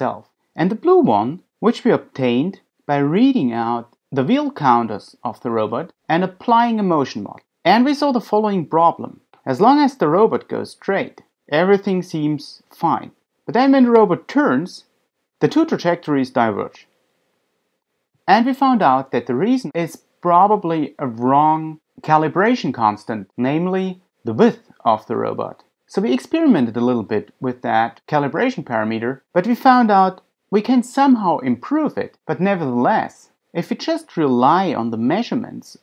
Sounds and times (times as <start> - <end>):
Speech: 0.0 - 16.9, 18.3 - 35.8.